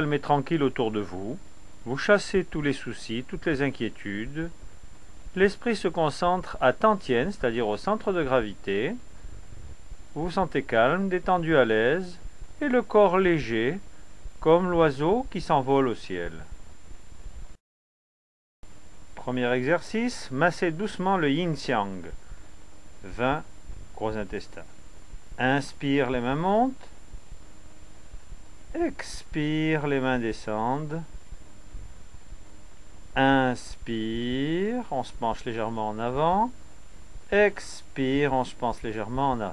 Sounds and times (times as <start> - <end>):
Speech: 0.0 - 4.6, 5.3 - 9.0, 10.2 - 13.8, 14.4 - 16.5, 19.2 - 22.2, 23.0 - 24.7, 25.4 - 27.0, 28.7 - 31.1, 33.2 - 36.6, 37.3 - 39.5.